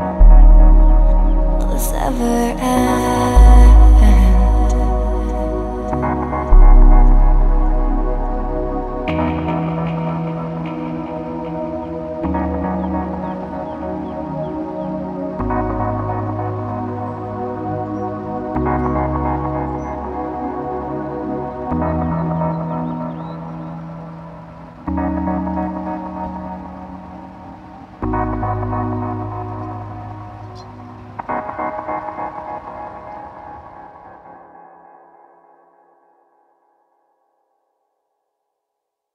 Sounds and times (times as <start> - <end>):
Music: 0.0 - 38.1.